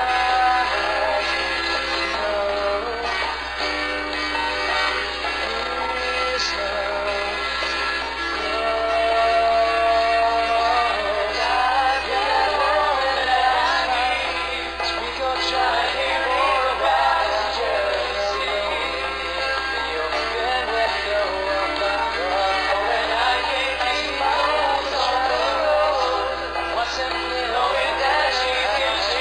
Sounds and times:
Singing: 0.0s - 3.2s, 5.4s - 7.4s, 8.2s - 29.2s
Music: 0.0s - 29.2s.

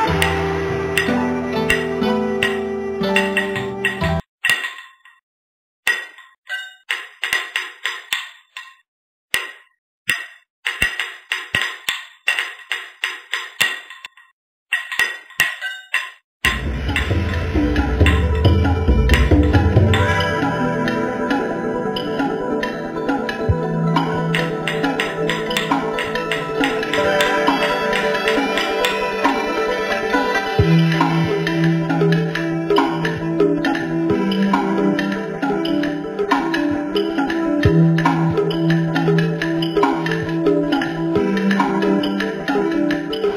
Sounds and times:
Music: 0.0s - 4.3s, 16.5s - 43.3s.

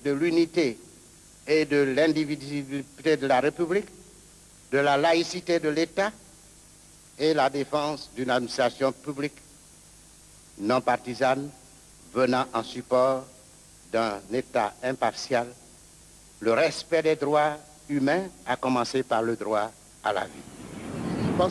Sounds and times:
Speech: 0.0s - 0.8s, 1.5s - 3.9s, 4.7s - 6.2s, 7.2s - 9.4s, 10.6s - 11.6s, 12.2s - 13.3s, 13.9s - 15.6s, 16.4s - 20.4s, 21.0s - 21.5s.

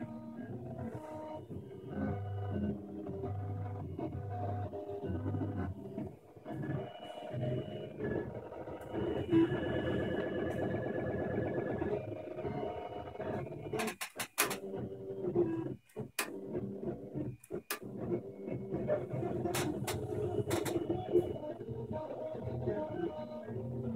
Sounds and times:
Printer: 0.0s - 23.9s.

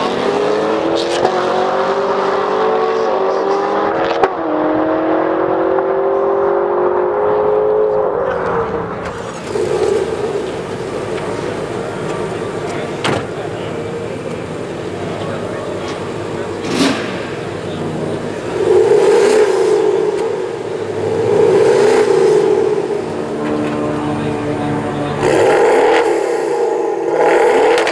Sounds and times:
Speech: 11.2s - 16.8s, 23.8s - 25.3s.

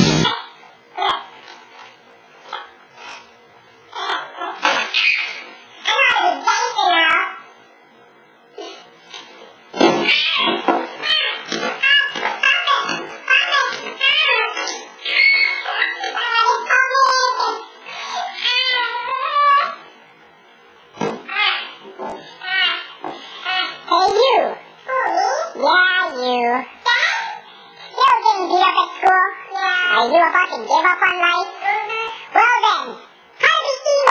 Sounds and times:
Speech: 5.8s - 7.5s, 16.0s - 19.8s, 23.9s - 34.1s.

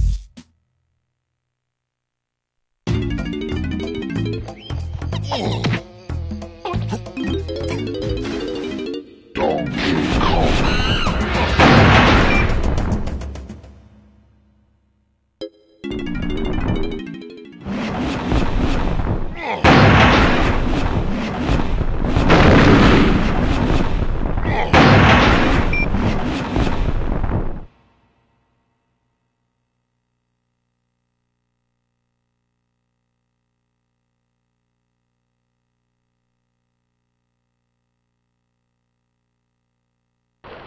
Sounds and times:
Music: 0.0s - 0.6s, 2.9s - 9.8s, 12.3s - 14.6s, 15.4s - 17.7s.

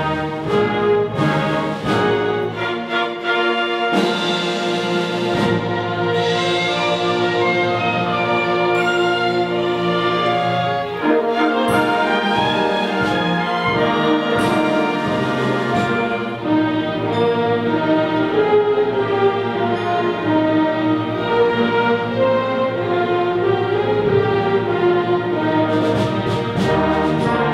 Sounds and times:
Music: 0.0s - 27.5s.

